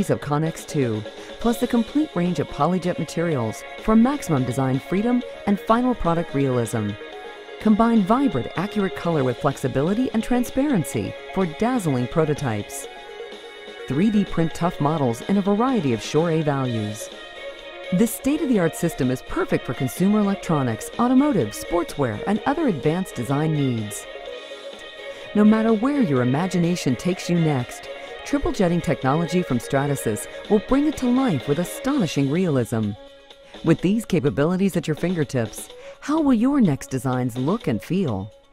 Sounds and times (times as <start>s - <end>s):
Speech: 0.0s - 7.0s, 7.6s - 12.9s, 13.9s - 17.1s, 17.9s - 24.1s, 25.3s - 33.0s, 33.6s - 38.3s
Music: 0.0s - 38.5s.